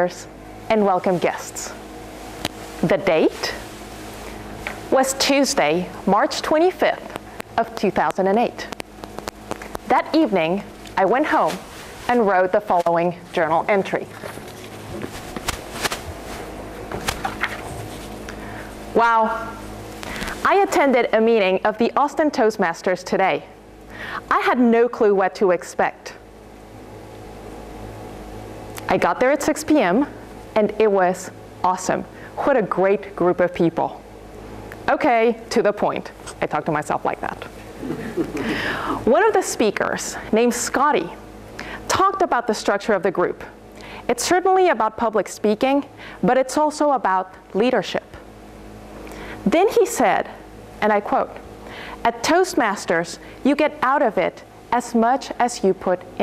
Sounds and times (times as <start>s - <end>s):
Female speech, woman speaking: 0.0s - 1.8s, 2.8s - 3.6s, 4.9s - 8.8s, 9.9s - 14.2s, 19.0s - 19.6s, 20.4s - 23.5s, 24.3s - 26.2s, 28.8s - 34.0s, 34.9s - 37.5s, 39.0s - 41.2s, 41.9s - 48.2s, 49.5s - 51.4s, 52.0s - 56.2s
Narration, monologue: 0.0s - 56.2s.